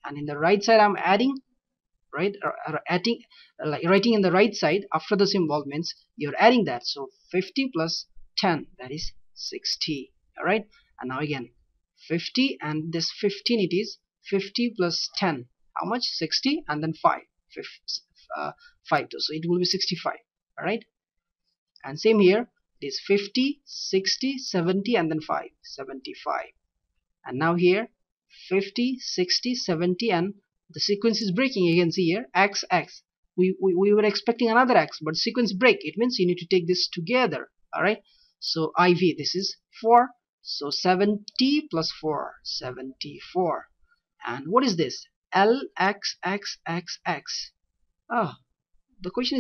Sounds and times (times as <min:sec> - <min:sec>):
Narration, monologue: 0:00.0 - 0:49.4.